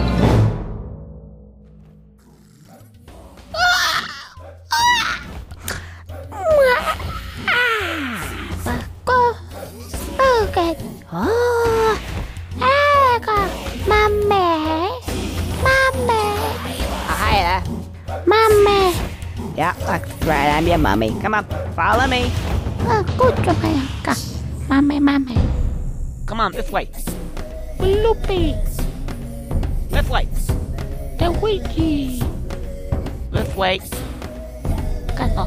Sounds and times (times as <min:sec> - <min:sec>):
Music: 0:00.0 - 0:35.4.